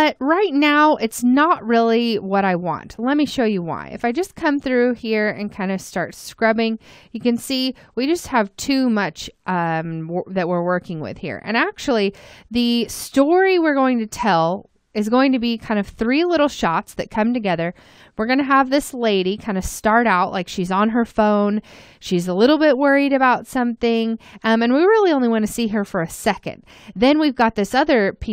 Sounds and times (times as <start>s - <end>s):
Speech: 0.0s - 28.3s.